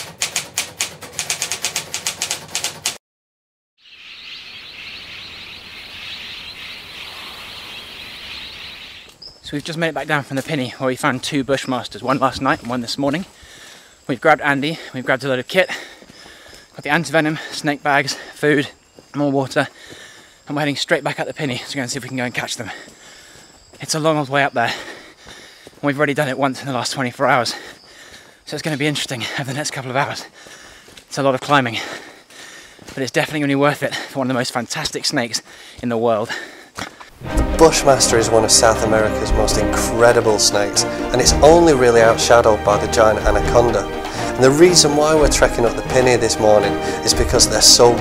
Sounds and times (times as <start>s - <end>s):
Outside, rural or natural: 0.0s - 3.0s, 3.8s - 48.0s
Speech: 9.5s - 13.3s, 14.1s - 15.8s, 16.8s - 19.7s, 20.5s - 22.8s, 23.8s - 24.8s, 25.8s - 27.6s, 28.5s - 30.3s, 31.1s - 31.9s, 33.0s - 36.4s, 37.4s - 48.0s.